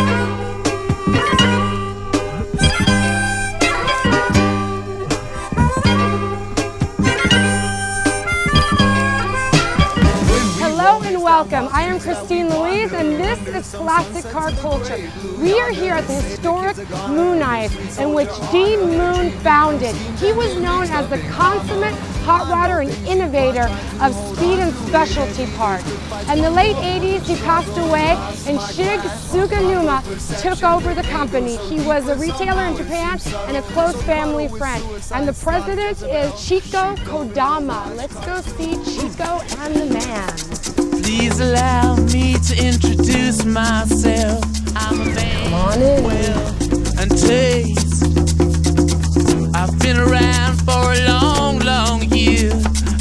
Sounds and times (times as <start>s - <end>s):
Music: 0.0s - 53.0s
Speech: 10.4s - 40.4s, 44.8s - 47.9s.